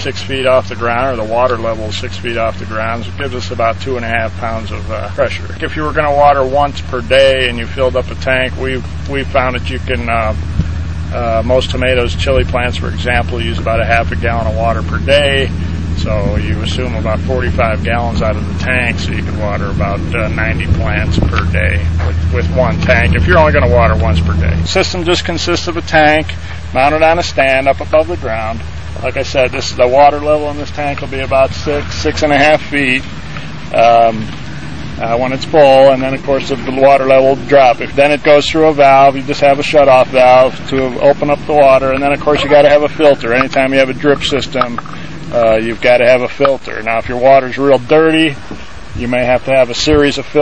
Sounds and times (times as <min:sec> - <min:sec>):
Speech: 0:00.0 - 0:10.4, 0:11.1 - 0:33.1, 0:33.7 - 0:34.4, 0:35.0 - 0:48.4, 0:49.0 - 0:50.4.